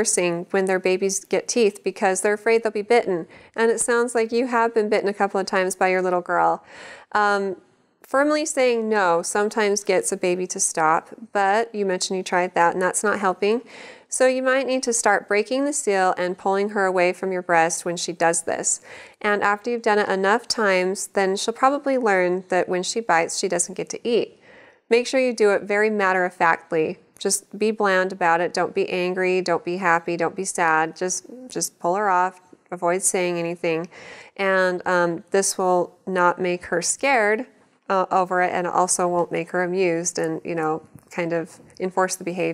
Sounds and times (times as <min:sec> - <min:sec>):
Speech: 0:00.0 - 0:06.6, 0:07.2 - 0:42.5.